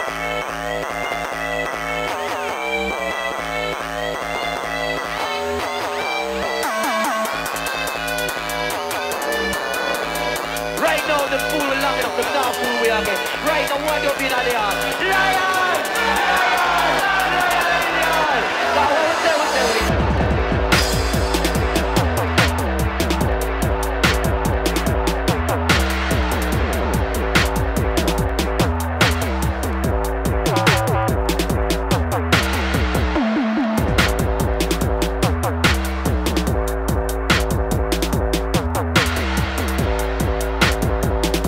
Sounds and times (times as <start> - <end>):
Drum and bass: 0.0 - 41.4.